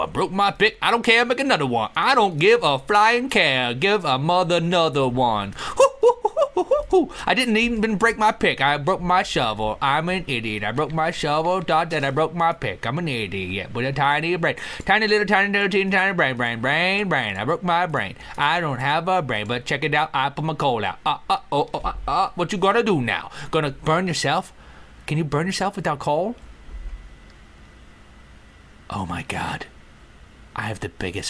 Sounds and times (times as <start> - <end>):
Speech: 0.0 - 5.5, 6.8 - 24.5, 25.1 - 26.4, 28.9 - 29.7, 30.6 - 31.2.